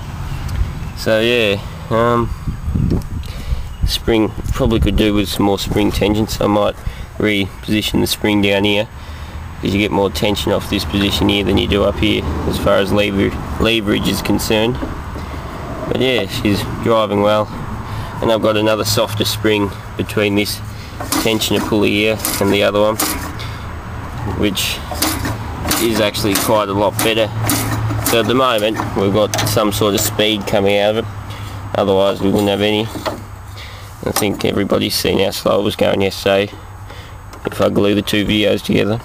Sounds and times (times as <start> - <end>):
Speech: 1.0 - 2.3, 3.8 - 8.9, 9.6 - 14.8, 15.9 - 17.6, 18.2 - 23.0, 24.2 - 24.9, 25.7 - 27.4, 28.1 - 31.1, 31.7 - 33.0, 34.0 - 36.6, 37.4 - 39.0.